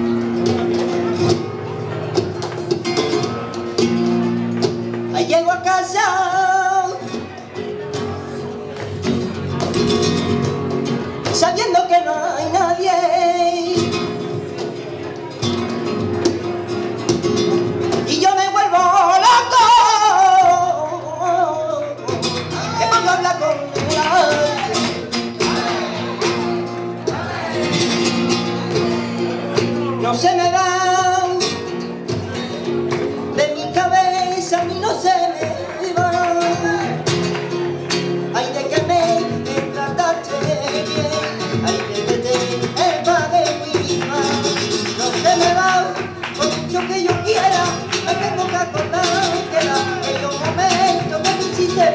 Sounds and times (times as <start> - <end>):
Flamenco: 0.0 - 51.9
Male singing: 5.1 - 7.2, 11.2 - 14.1, 18.0 - 25.8, 29.8 - 31.6, 33.4 - 37.1, 38.3 - 51.9.